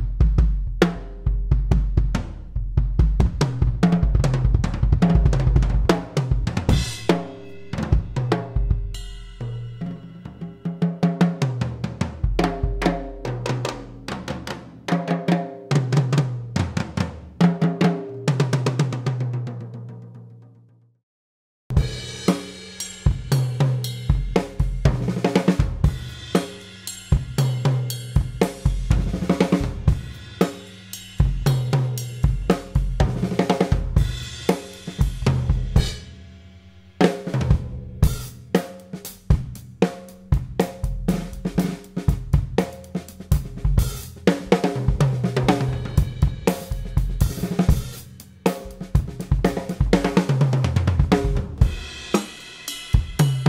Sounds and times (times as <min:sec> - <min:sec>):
Bass drum: 0:00.0 - 0:09.7, 0:12.0 - 0:14.6, 0:23.1 - 0:26.4, 0:27.1 - 0:30.3, 0:31.2 - 0:36.1, 0:37.3 - 0:52.3, 0:52.9 - 0:53.4
Drum kit: 0:00.0 - 0:20.4, 0:21.7 - 0:53.4.